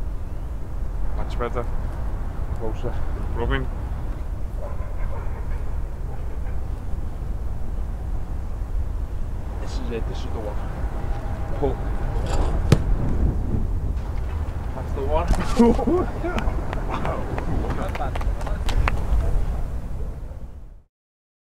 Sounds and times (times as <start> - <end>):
Speech: 1.2 - 1.7, 2.6 - 3.7, 9.6 - 10.7, 11.5 - 11.8, 14.8 - 19.7.